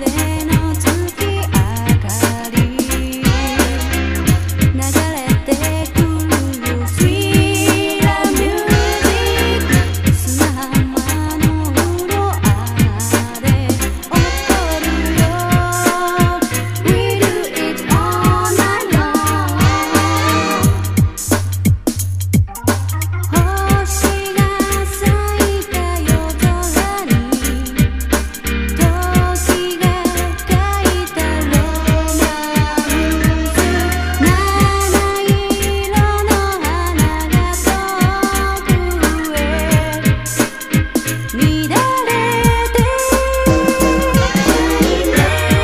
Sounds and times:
Music: 0.0 - 45.6.

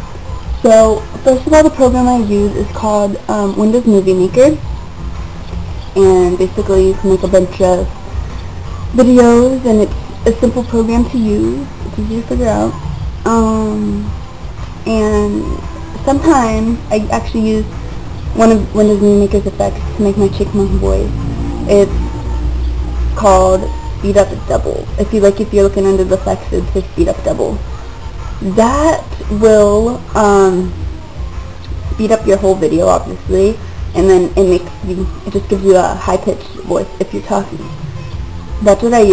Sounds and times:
Speech: 0.6 - 4.6, 6.0 - 7.9, 8.9 - 14.1, 14.9 - 17.8, 18.4 - 22.1, 23.2 - 27.6, 28.4 - 30.8, 31.9 - 37.8, 38.6 - 39.1.

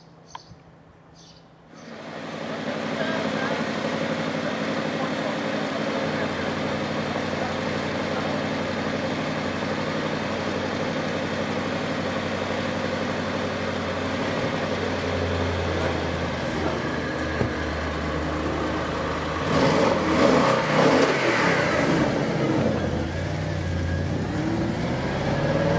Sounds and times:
Speech: 2.5 - 8.8.

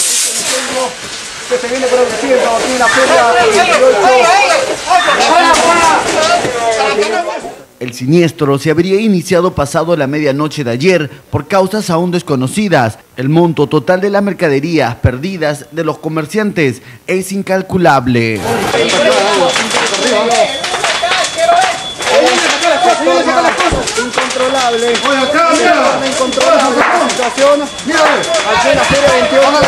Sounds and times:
Speech: 0.3 - 29.6.

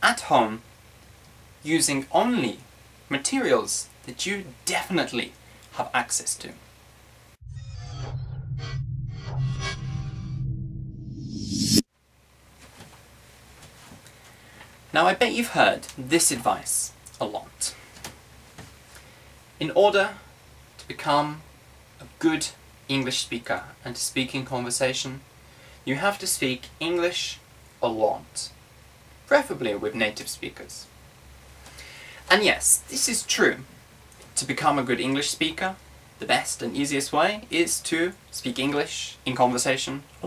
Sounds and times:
Speech: 0.0 - 0.6, 1.6 - 6.6, 14.9 - 17.8, 19.6 - 25.2, 25.8 - 28.6, 29.3 - 30.9, 32.3 - 33.7, 34.3 - 40.2.

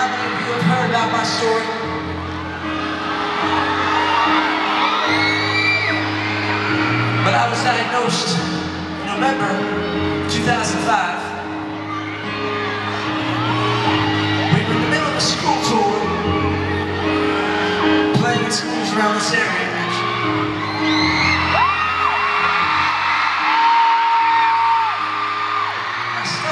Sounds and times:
Male speech, man speaking: 0.0 - 1.8, 7.2 - 9.7, 10.3 - 11.3, 14.6 - 16.2, 18.1 - 20.0, 26.2 - 26.5
Music: 0.0 - 26.5.

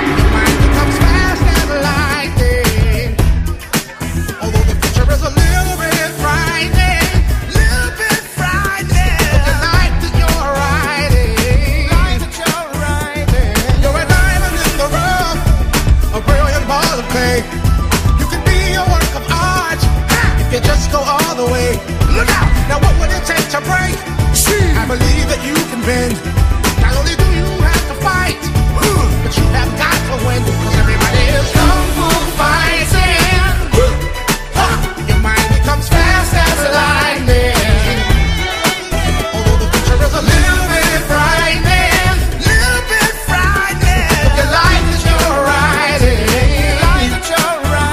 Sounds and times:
Music: 0.0 - 47.9.

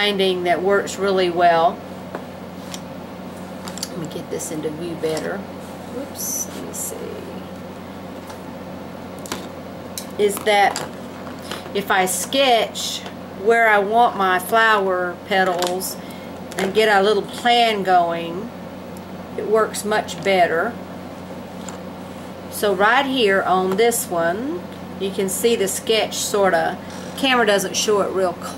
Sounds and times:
Speech: 0.0 - 1.8, 3.9 - 7.5, 10.2 - 10.8, 11.8 - 16.0, 16.6 - 18.5, 19.4 - 20.8, 22.6 - 28.5.

